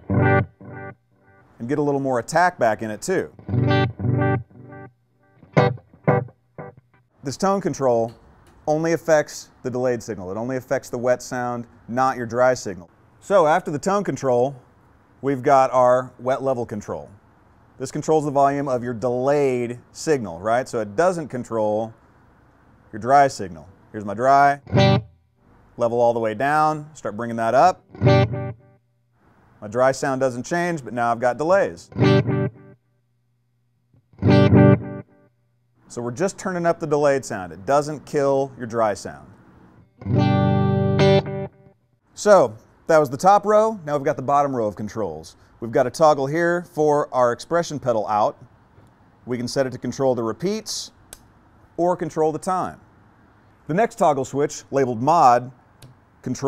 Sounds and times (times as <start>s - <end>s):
Effects unit: 0.0s - 1.6s, 3.3s - 7.2s, 24.6s - 25.3s, 27.8s - 28.8s, 31.9s - 33.0s, 33.9s - 35.4s, 39.7s - 41.8s
Guitar: 0.0s - 8.6s, 24.0s - 25.2s, 27.1s - 28.8s, 30.8s - 32.8s, 34.0s - 35.3s, 35.9s - 44.7s
Speech: 1.6s - 3.4s, 7.2s - 14.6s, 15.2s - 17.2s, 17.8s - 22.0s, 22.9s - 24.7s, 25.8s - 27.8s, 29.6s - 32.0s, 35.9s - 39.4s, 42.2s - 48.5s, 49.3s - 51.0s, 51.8s - 52.8s, 53.7s - 55.6s, 56.2s - 56.4s.